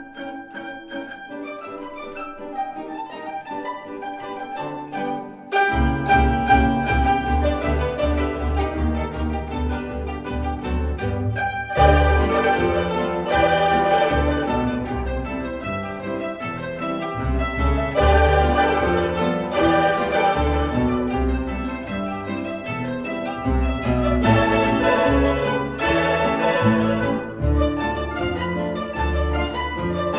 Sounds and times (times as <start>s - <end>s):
Bowed string instrument: 0.0s - 30.1s
Classical music: 0.0s - 30.1s.